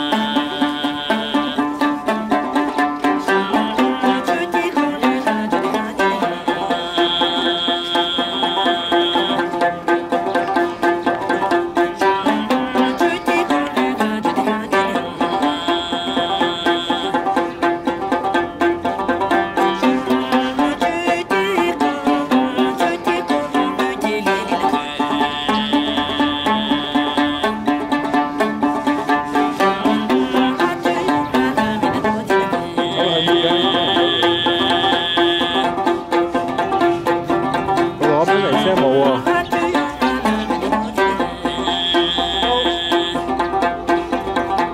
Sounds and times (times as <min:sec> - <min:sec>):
Music: 0:00.0 - 0:44.7.